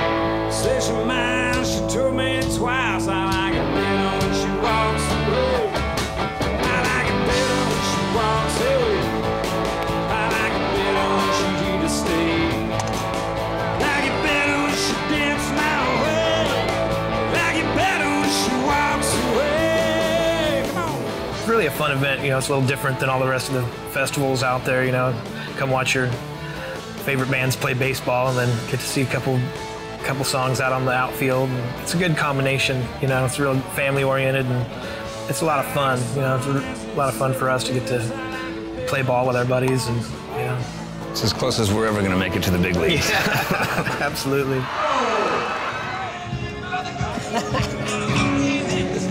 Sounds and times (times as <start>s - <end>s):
Rhythm and blues: 0.0s - 49.1s.